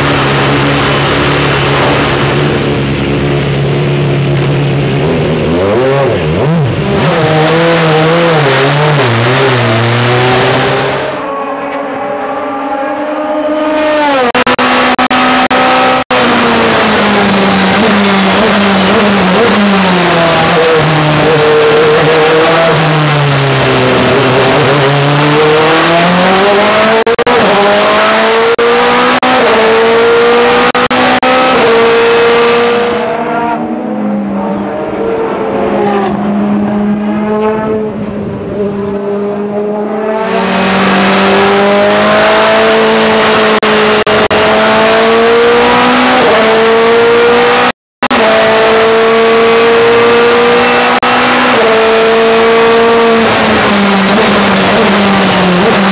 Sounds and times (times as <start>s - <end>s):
Race car, auto racing: 0.0s - 55.9s.